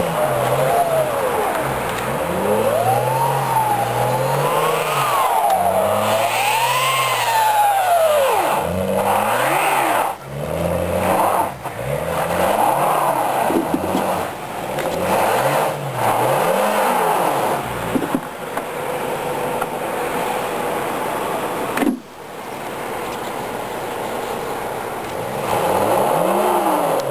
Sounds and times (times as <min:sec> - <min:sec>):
Car: 0:00.0 - 0:27.1
Outside, rural or natural: 0:00.0 - 0:27.1.